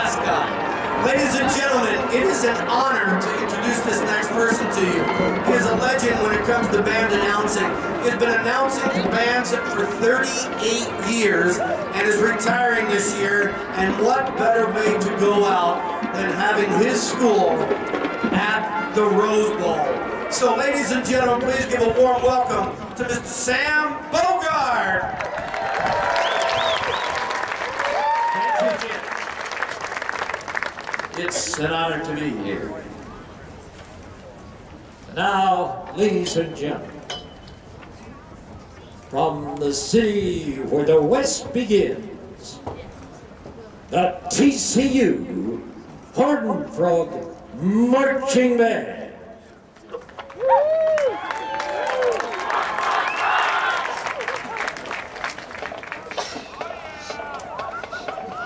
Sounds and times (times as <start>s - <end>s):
Speech: 0.0s - 17.7s, 18.3s - 25.1s, 31.2s - 32.9s, 35.1s - 37.0s, 39.1s - 43.0s, 43.9s - 49.2s.